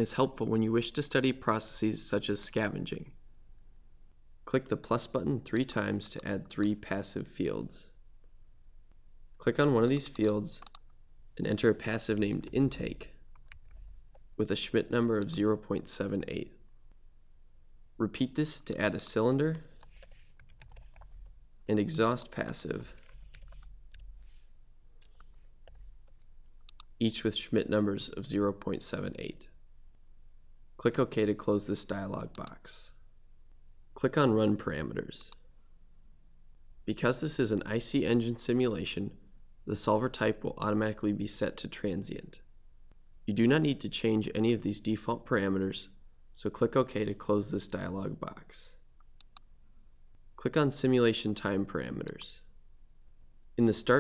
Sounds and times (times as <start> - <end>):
Speech: 0.0 - 3.2, 4.5 - 8.0, 9.4 - 10.7, 11.4 - 13.2, 14.4 - 16.6, 18.0 - 19.7, 21.7 - 23.0, 27.0 - 29.6, 30.8 - 33.0, 34.0 - 35.4, 36.9 - 42.5, 43.3 - 48.8, 50.4 - 52.5, 53.6 - 54.0.